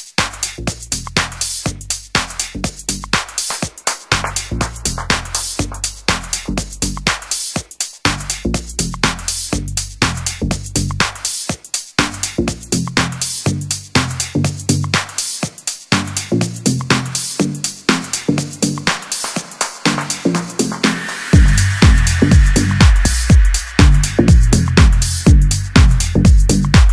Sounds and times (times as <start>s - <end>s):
Music: 0.0s - 26.9s.